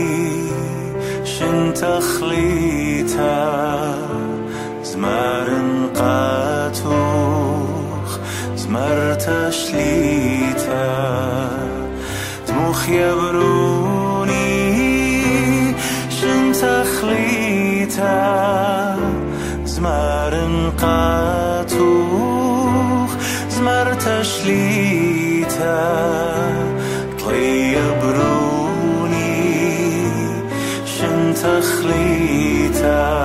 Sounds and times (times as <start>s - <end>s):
Lullaby: 0.0s - 33.2s.